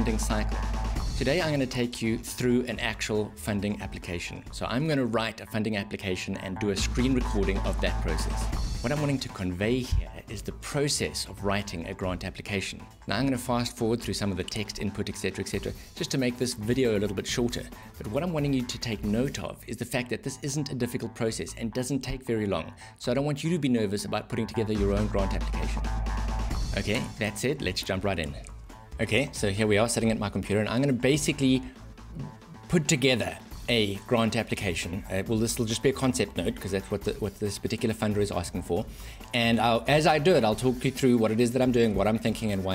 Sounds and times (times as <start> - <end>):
Speech: 0.0 - 0.6, 1.2 - 25.8, 26.7 - 42.7
Music: 0.0 - 42.7.